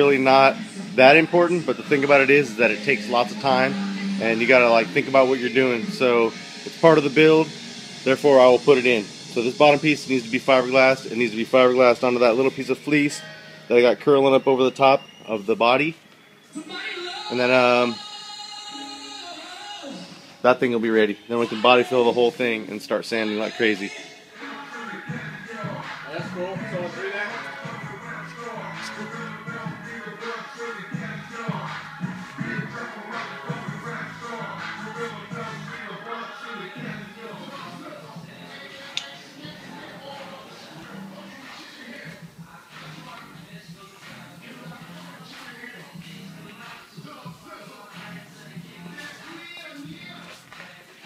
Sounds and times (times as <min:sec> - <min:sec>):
Speech: 0:00.0 - 0:07.5, 0:08.1 - 0:16.0, 0:20.4 - 0:24.0
Music: 0:00.0 - 0:51.0.